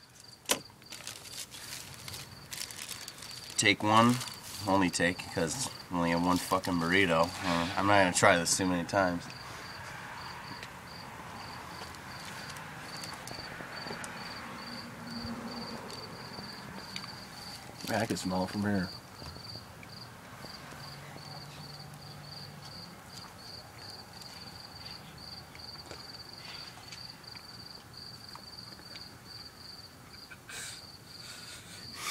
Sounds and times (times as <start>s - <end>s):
Speech: 3.6s - 9.3s, 17.9s - 18.9s.